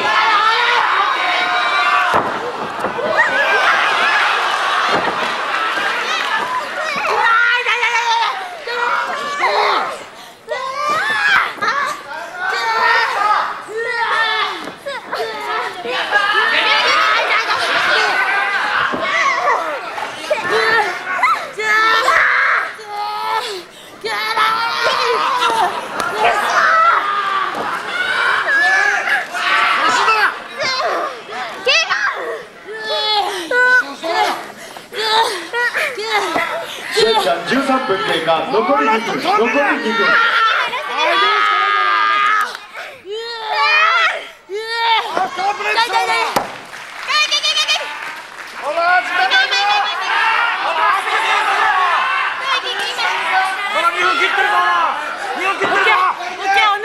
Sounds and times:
Chatter: 0:00.0 - 0:56.8
Inside, public space: 0:00.0 - 0:56.8.

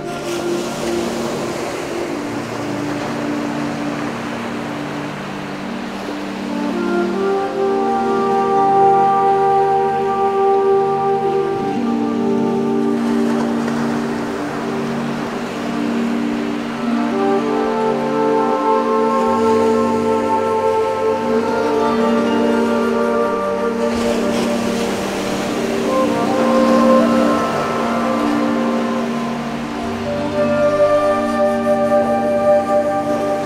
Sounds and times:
Waves, surf: 0:00.0 - 0:33.4.

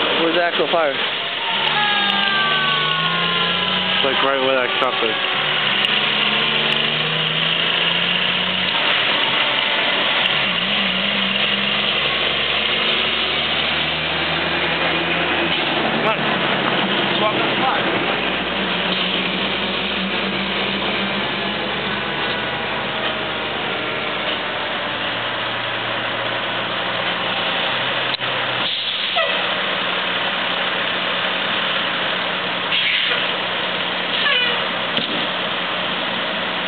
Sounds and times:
Engine: 0:00.0 - 0:36.6
Truck: 0:00.0 - 0:36.6.

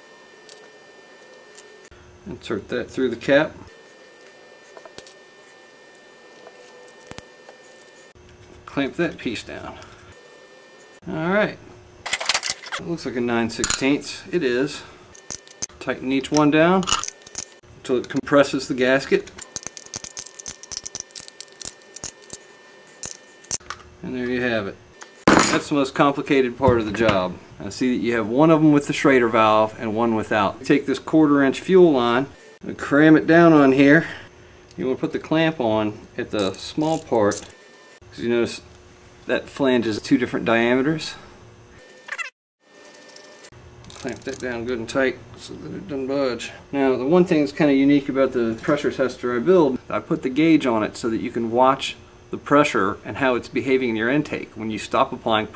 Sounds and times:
Speech: 0:02.2 - 0:03.7, 0:08.7 - 0:09.8, 0:11.0 - 0:11.6, 0:12.8 - 0:14.9, 0:15.8 - 0:16.9, 0:17.8 - 0:19.3, 0:24.0 - 0:24.8, 0:25.5 - 0:37.5, 0:38.1 - 0:38.7, 0:39.3 - 0:41.3, 0:44.0 - 0:55.5.

